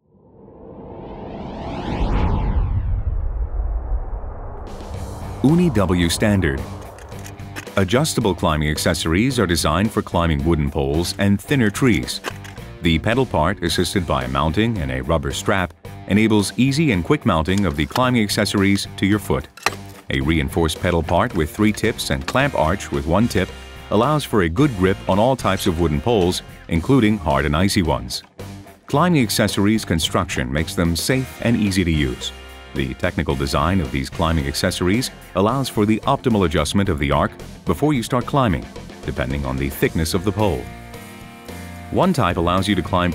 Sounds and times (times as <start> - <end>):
Music: 4.6 - 43.1
Speech: 5.4 - 6.8, 7.7 - 28.3, 28.9 - 40.7, 41.9 - 43.1.